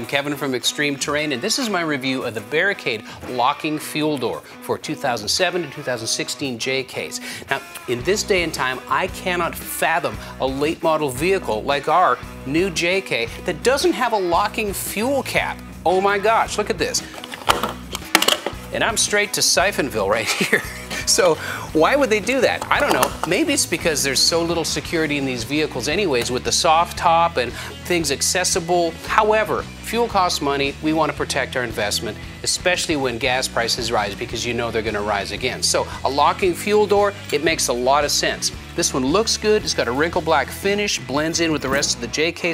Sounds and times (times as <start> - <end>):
Speech: 0.0 - 17.1, 18.7 - 42.5
Music: 0.0 - 42.5.